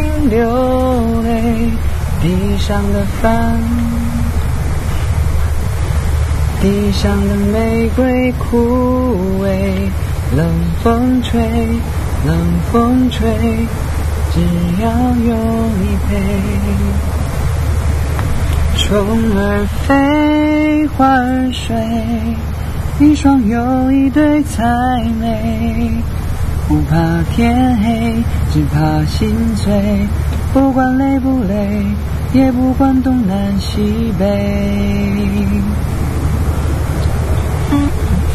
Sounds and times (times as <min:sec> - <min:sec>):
Male singing: 0:00.0 - 0:04.4, 0:06.6 - 0:17.0, 0:18.8 - 0:26.1, 0:26.7 - 0:35.8, 0:37.7 - 0:38.3.